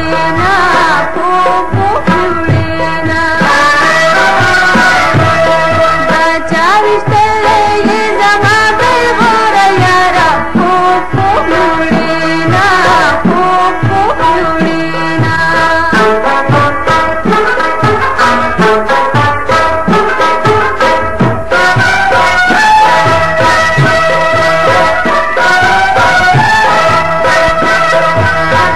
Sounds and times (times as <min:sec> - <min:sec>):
Music: 0:00.0 - 0:28.7.